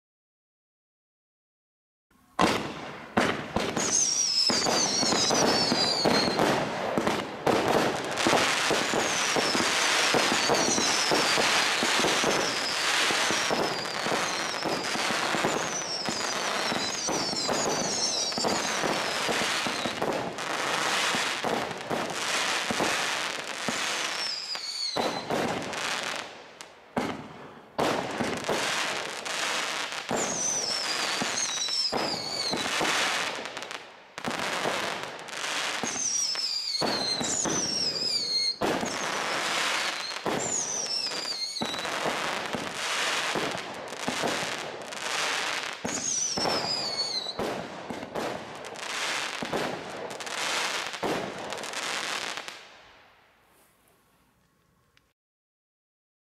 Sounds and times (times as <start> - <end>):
Firecracker: 2.1 - 55.1.